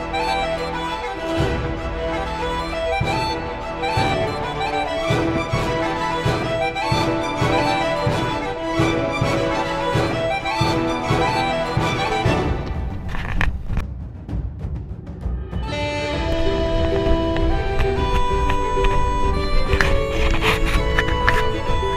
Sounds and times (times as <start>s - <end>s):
Music: 0.0s - 21.9s
Outside, rural or natural: 15.2s - 21.9s
Run: 16.1s - 21.9s.